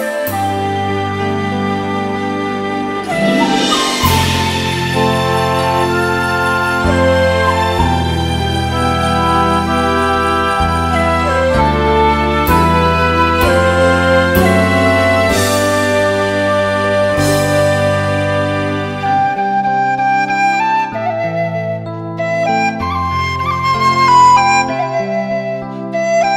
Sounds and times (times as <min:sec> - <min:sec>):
Flute: 0:00.0 - 0:26.3
Tender music: 0:00.0 - 0:26.3.